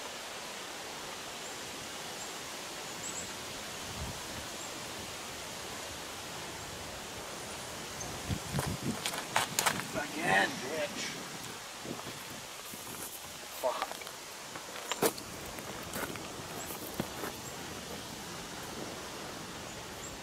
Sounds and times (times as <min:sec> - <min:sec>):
Outside, rural or natural: 0:00.0 - 0:20.2
Speech: 0:09.9 - 0:11.2, 0:13.6 - 0:14.0.